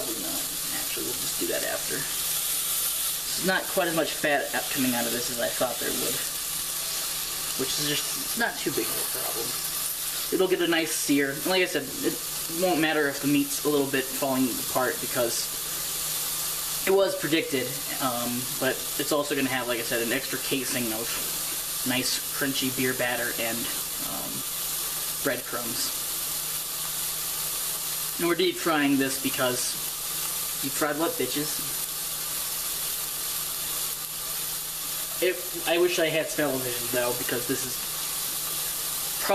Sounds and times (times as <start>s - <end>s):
Speech: 0.0s - 2.2s, 3.3s - 6.4s, 7.6s - 9.6s, 10.3s - 15.5s, 16.8s - 24.5s, 25.2s - 26.0s, 28.2s - 29.9s, 30.6s - 31.8s, 35.2s - 37.8s.